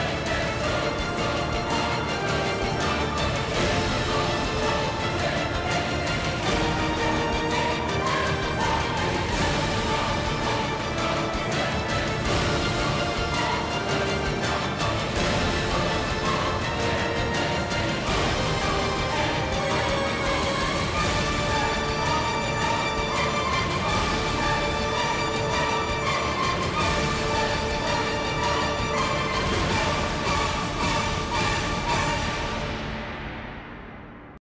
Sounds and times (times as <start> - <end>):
Music: 0.0 - 34.4.